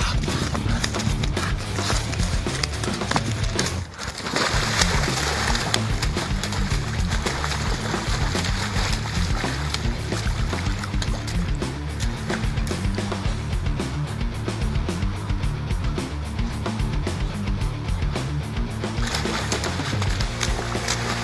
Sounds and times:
Music: 0.0 - 21.2.

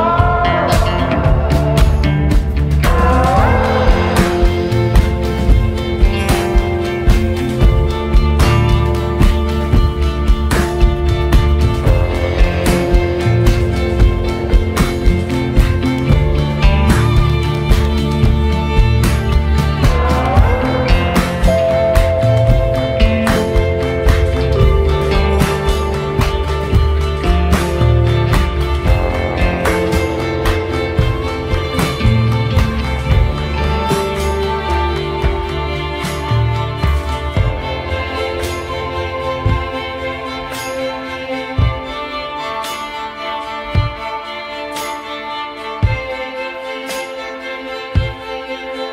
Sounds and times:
Orchestra: 0.0 - 48.9.

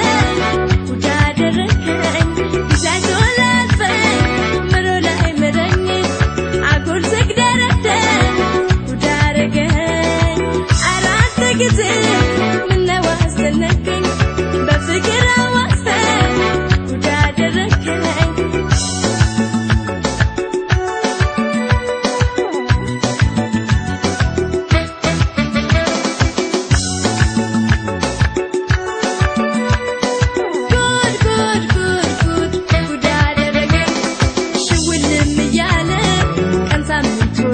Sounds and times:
Folk music: 0.0 - 37.5
Independent music: 0.0 - 37.5
Rhythm and blues: 0.0 - 37.5.

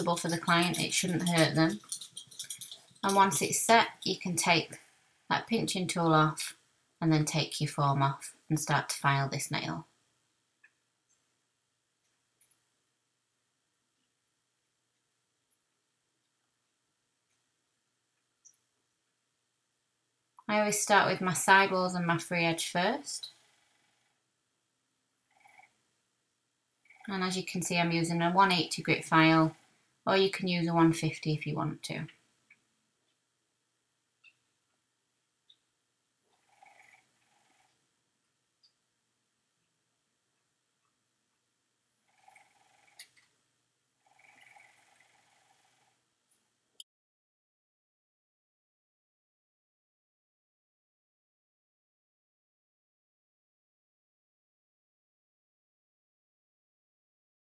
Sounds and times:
Speech: 0.0 - 1.8, 3.0 - 9.9, 20.5 - 23.3, 27.1 - 32.1
Inside, small room: 0.0 - 46.9.

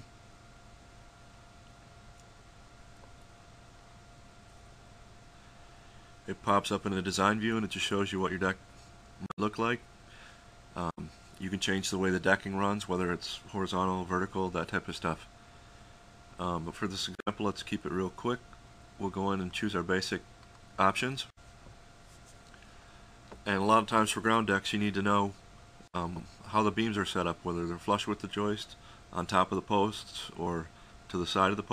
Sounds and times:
Speech: 6.3 - 8.6, 9.2 - 9.8, 10.8 - 15.3, 16.4 - 18.4, 19.0 - 21.4, 23.4 - 25.4, 26.0 - 31.7.

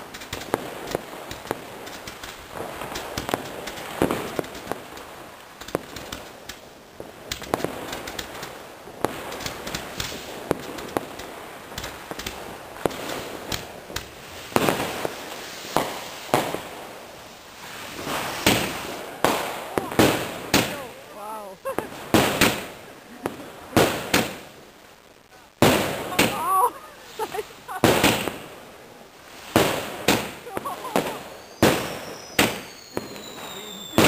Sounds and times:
Firecracker: 0.0 - 34.0
Speech: 20.6 - 21.8.

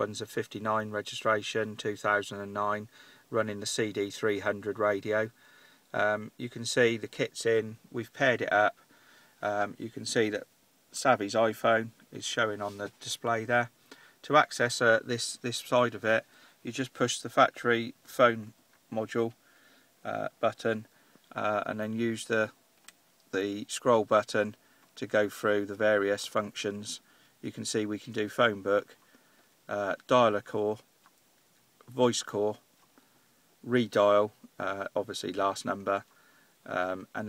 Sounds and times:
Speech: 0.0 - 5.4, 6.0 - 8.8, 9.4 - 19.4, 20.1 - 22.6, 23.3 - 29.0, 29.7 - 30.9, 31.8 - 32.6, 33.6 - 36.1, 36.7 - 37.2.

